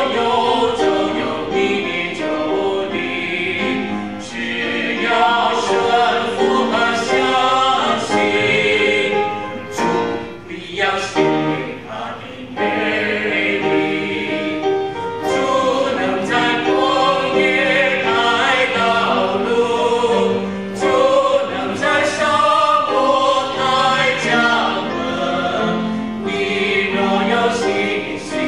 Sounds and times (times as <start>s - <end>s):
Choir: 0.0s - 28.4s
Gospel music: 0.0s - 28.4s.